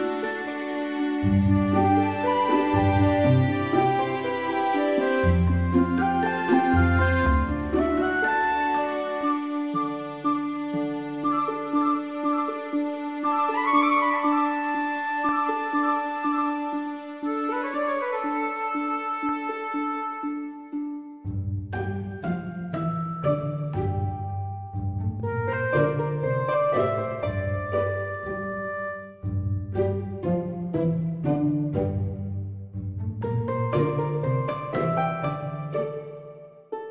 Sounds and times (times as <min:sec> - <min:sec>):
Music: 0:00.0 - 0:36.9.